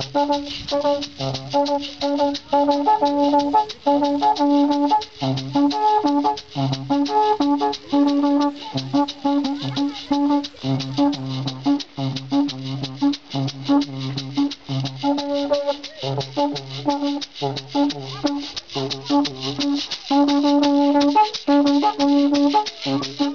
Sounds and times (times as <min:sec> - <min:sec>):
Music: 0:00.0 - 0:23.3
Speech: 0:07.8 - 0:11.3, 0:15.4 - 0:16.3, 0:17.8 - 0:20.3, 0:22.4 - 0:23.3.